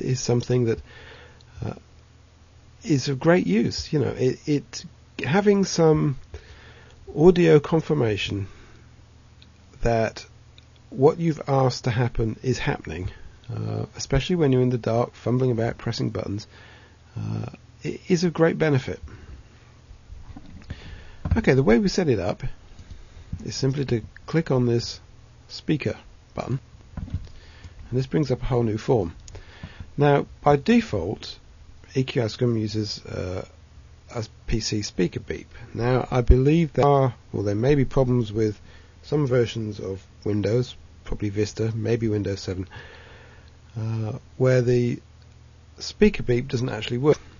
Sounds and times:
Speech: 0.0 - 0.8, 1.6 - 1.8, 2.8 - 6.2, 7.1 - 8.6, 9.8 - 10.3, 10.9 - 16.5, 17.2 - 19.0, 21.3 - 22.6, 23.4 - 26.6, 27.9 - 29.2, 30.0 - 42.7, 43.8 - 45.0, 45.8 - 47.3.

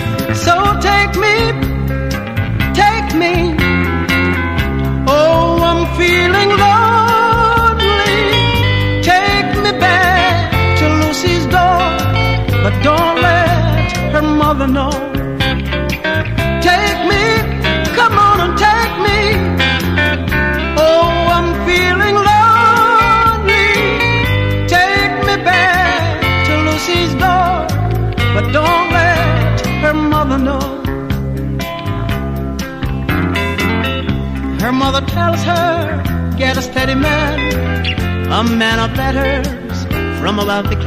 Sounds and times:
Music: 0.0 - 40.8.

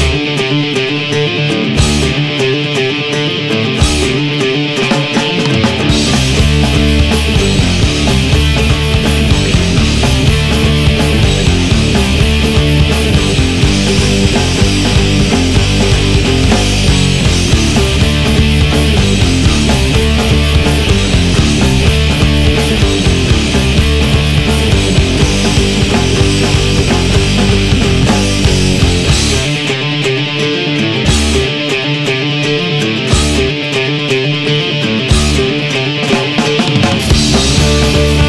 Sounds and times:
Heavy metal: 0.0 - 38.2.

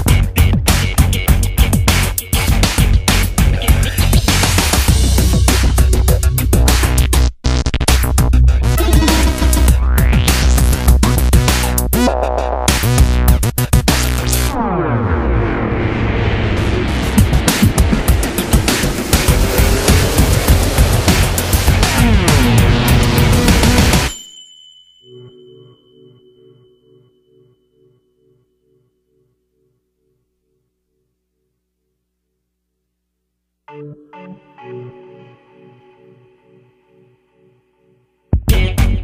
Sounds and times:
Rock music: 0.0 - 12.0, 15.8 - 24.1, 38.4 - 39.0.

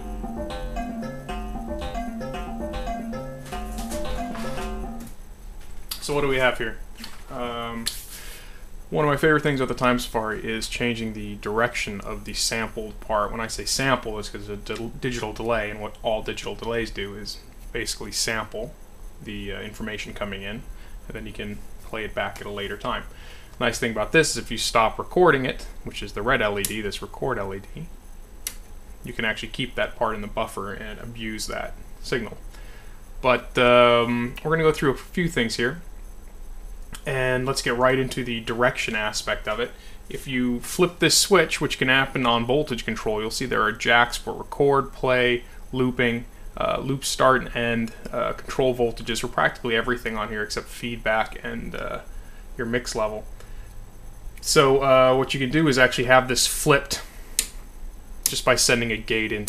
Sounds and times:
Speech: 5.9 - 8.1, 8.9 - 28.0, 29.0 - 32.5, 33.2 - 35.9, 37.0 - 53.3, 54.4 - 57.1, 58.3 - 59.4.

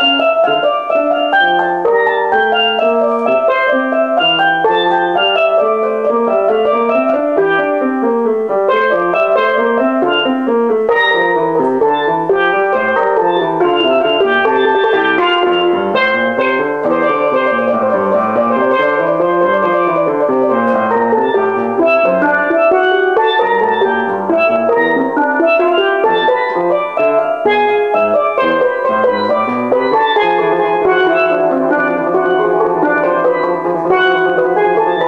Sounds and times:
Steelpan: 0.0 - 35.0.

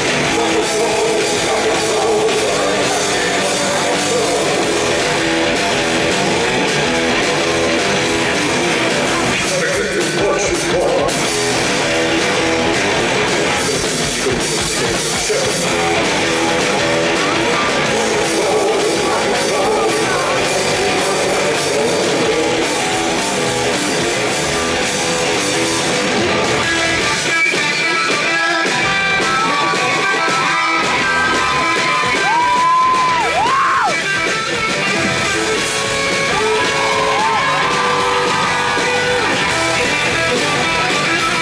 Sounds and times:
Rock and roll: 0.0 - 41.4.

